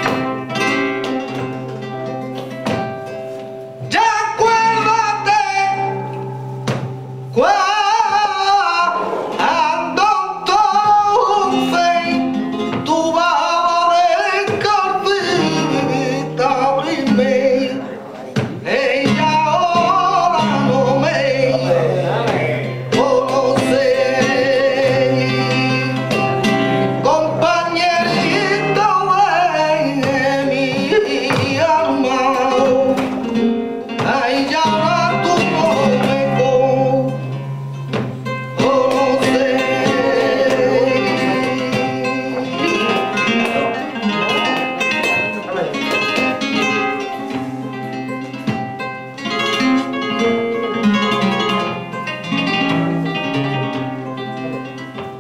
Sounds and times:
Guitar: 0:00.0 - 0:55.2.

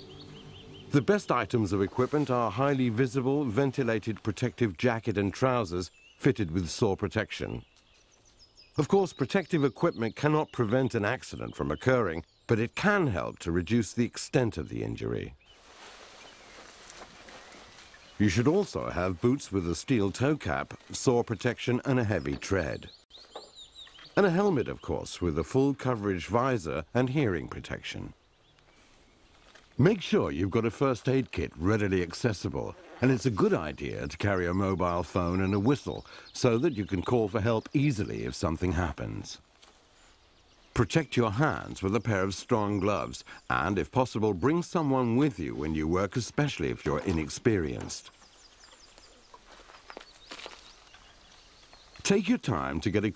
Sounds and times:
Speech: 0:00.9 - 0:07.6, 0:08.8 - 0:15.4, 0:18.2 - 0:22.9, 0:24.2 - 0:28.2, 0:29.8 - 0:39.4, 0:40.8 - 0:48.1, 0:52.0 - 0:53.1.

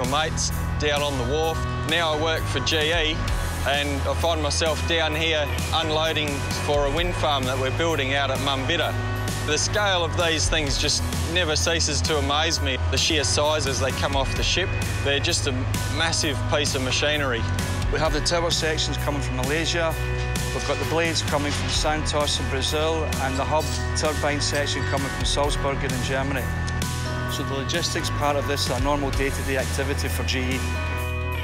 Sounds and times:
Speech: 0:00.0 - 0:26.5, 0:27.3 - 0:30.7
Music: 0:00.0 - 0:31.4.

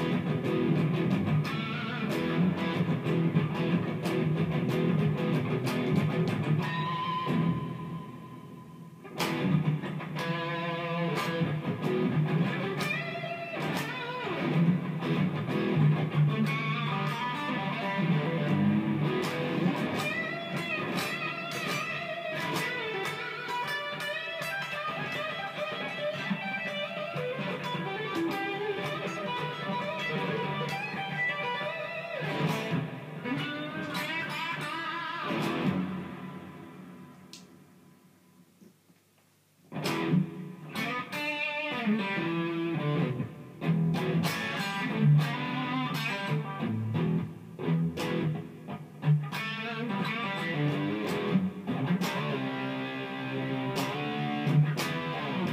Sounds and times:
Guitar: 0:00.0 - 0:55.5.

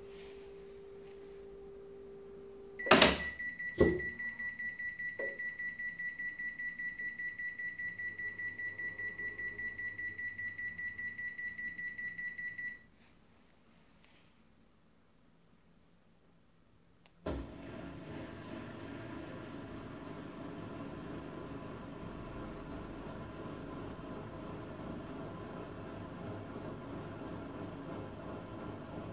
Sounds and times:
Inside, small room: 0:00.0 - 0:29.1
Beep, bleep: 0:02.8 - 0:12.8.

